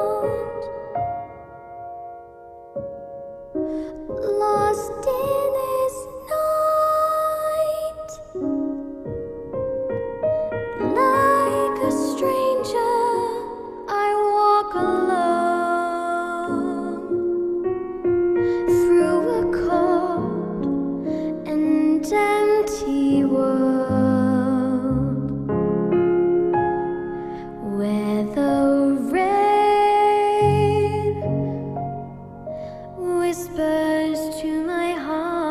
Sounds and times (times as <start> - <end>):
Music: 0.0 - 35.5.